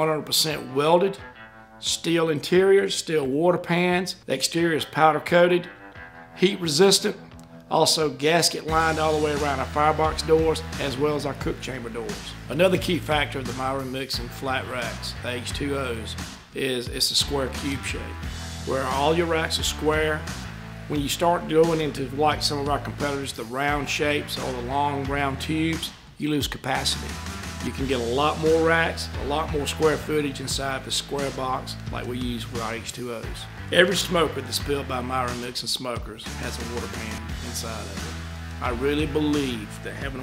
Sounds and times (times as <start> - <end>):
Speech: 0.0 - 1.2, 1.8 - 5.7, 6.4 - 20.3, 20.9 - 40.2
Music: 0.0 - 40.2.